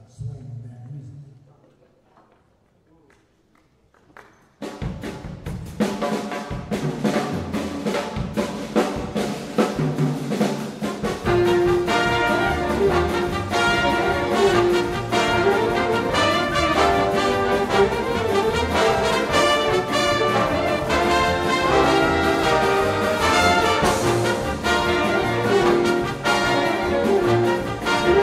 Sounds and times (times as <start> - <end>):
Swing music: 4.7 - 28.2.